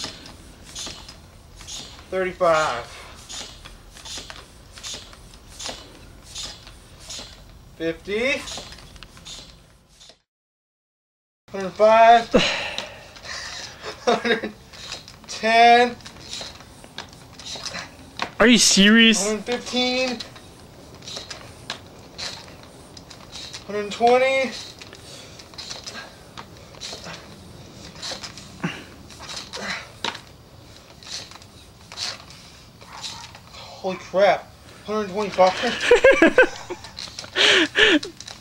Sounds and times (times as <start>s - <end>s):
Speech: 18.4s - 20.2s.